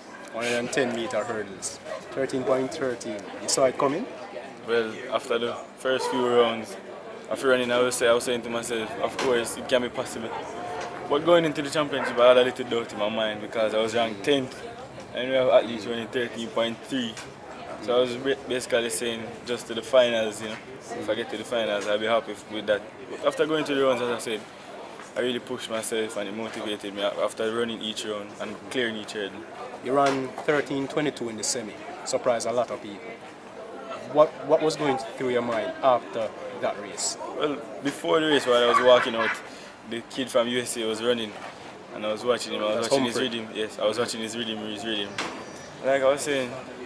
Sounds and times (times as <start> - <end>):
Outside, urban or manmade: 0.0 - 46.8
Male speech, man speaking: 0.3 - 24.5, 25.2 - 33.2, 33.9 - 46.8.